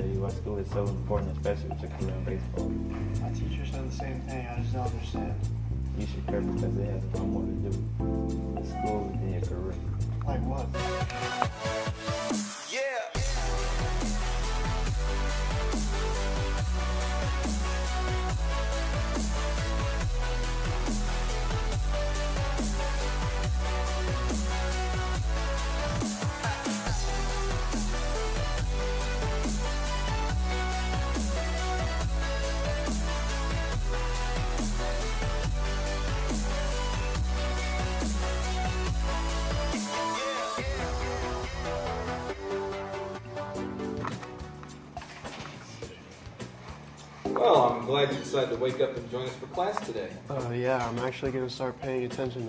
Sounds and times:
Speech: 0.0s - 2.6s, 3.2s - 5.4s, 6.0s - 7.9s, 8.6s - 10.8s, 47.4s - 52.4s
Music: 0.0s - 52.4s.

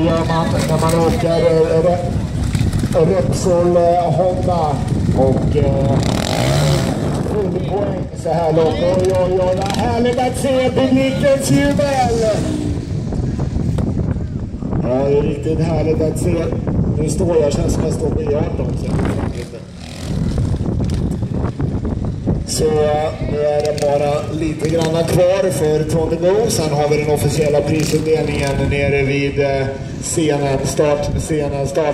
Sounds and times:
Speech: 0.0s - 2.1s, 3.0s - 6.2s, 7.3s - 12.6s, 14.8s - 19.7s, 22.5s - 31.9s
Outside, rural or natural: 0.0s - 31.9s
Vehicle: 0.0s - 31.9s.

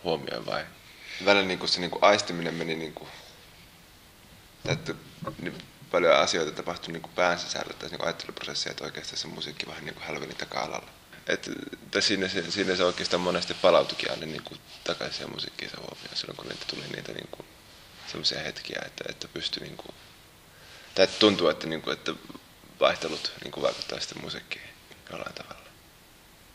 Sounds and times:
Speech: 0.0s - 3.4s, 4.6s - 20.0s, 21.0s - 25.8s.

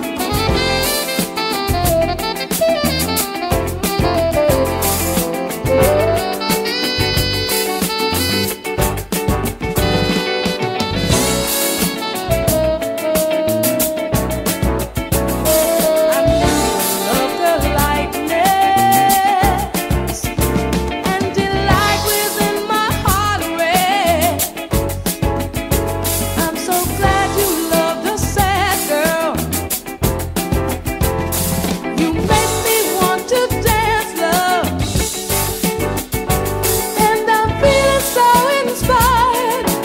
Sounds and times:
Music: 0.0s - 39.8s.

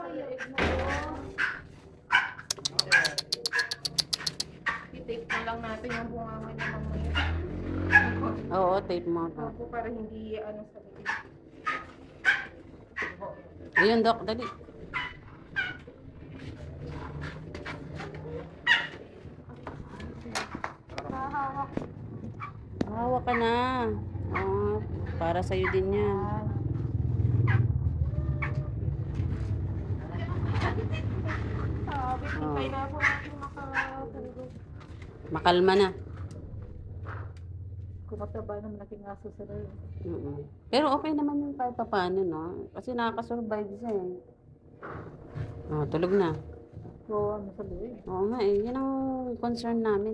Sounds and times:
Canidae, dogs, wolves: 0.3s - 8.5s, 11.0s - 20.5s, 22.2s - 29.2s, 31.0s - 34.8s
Bow-wow: 0.4s - 8.5s, 11.0s - 15.8s, 17.6s - 19.0s, 25.5s - 25.9s, 27.4s - 28.8s, 31.2s - 34.1s.

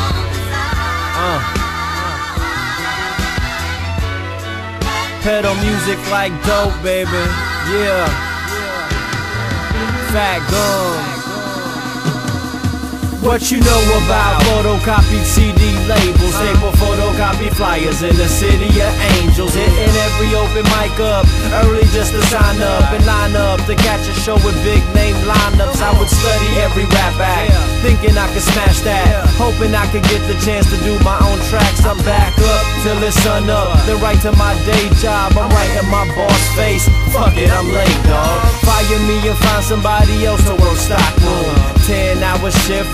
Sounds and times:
Music: 0.0s - 42.9s.

